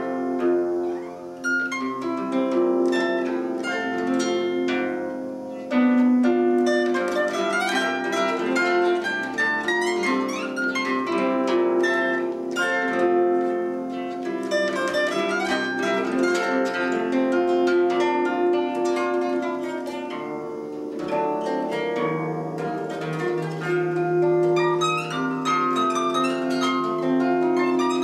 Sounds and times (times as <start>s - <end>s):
Music: 0.0s - 28.0s.